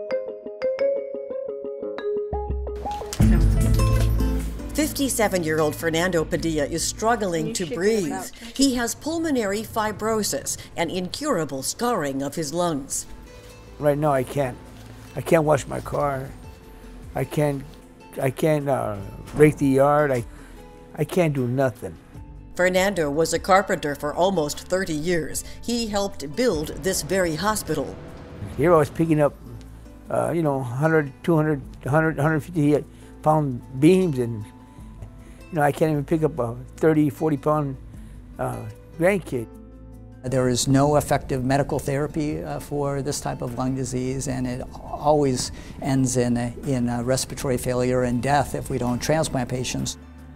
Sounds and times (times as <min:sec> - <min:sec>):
Music: 0:00.0 - 0:50.3.